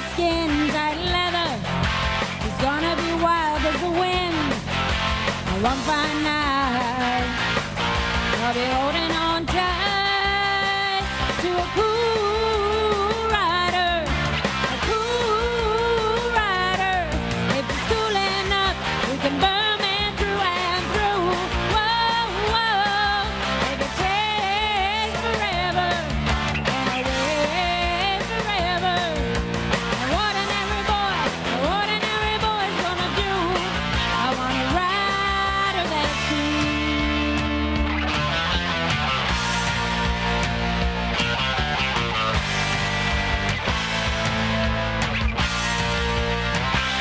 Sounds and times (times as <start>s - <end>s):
Female singing: 0.0s - 1.6s, 2.4s - 4.6s, 5.5s - 7.3s, 8.4s - 14.1s, 14.8s - 26.1s, 26.7s - 29.2s, 30.0s - 37.9s
Music: 0.0s - 47.0s.